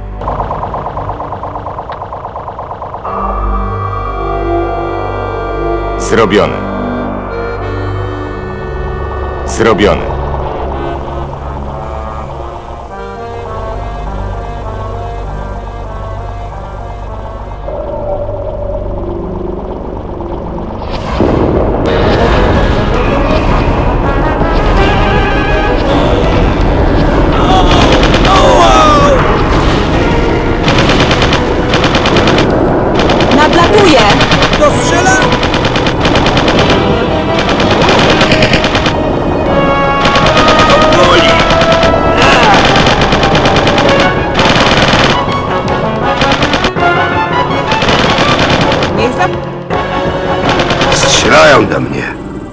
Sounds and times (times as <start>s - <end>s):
Music: 0.0s - 52.5s.